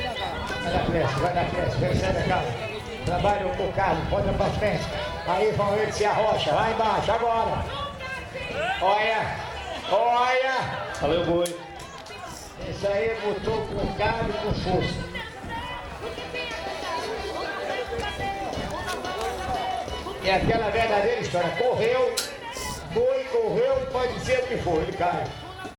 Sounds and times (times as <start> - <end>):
Music: 0.0 - 25.7
Speech: 20.2 - 25.7.